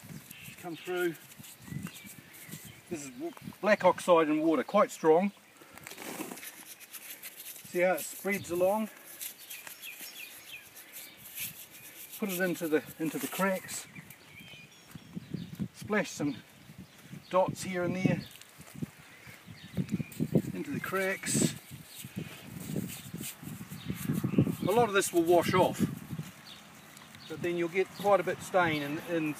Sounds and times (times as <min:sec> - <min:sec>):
Environmental noise: 0:00.0 - 0:29.3
Outside, rural or natural: 0:00.0 - 0:29.3
Chirp, tweet: 0:00.1 - 0:03.4, 0:09.3 - 0:18.4, 0:19.0 - 0:22.2, 0:23.0 - 0:29.3
Speech: 0:02.9 - 0:05.3, 0:07.7 - 0:08.9, 0:12.2 - 0:13.9, 0:15.8 - 0:16.4, 0:24.7 - 0:25.9, 0:27.3 - 0:29.3.